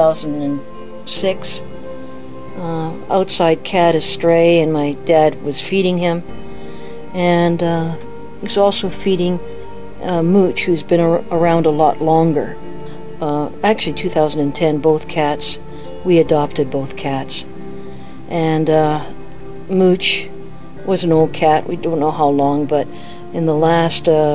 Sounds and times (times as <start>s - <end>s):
Speech: 0.0s - 1.6s, 2.6s - 6.2s, 7.1s - 9.4s, 10.0s - 12.6s, 13.2s - 17.5s, 18.3s - 20.3s, 20.9s - 24.3s
Music: 0.0s - 24.3s.